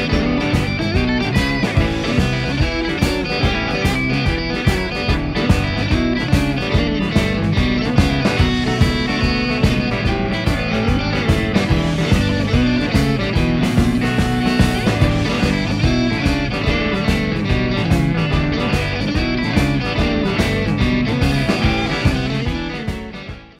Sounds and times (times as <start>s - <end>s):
Music: 0.0s - 23.5s.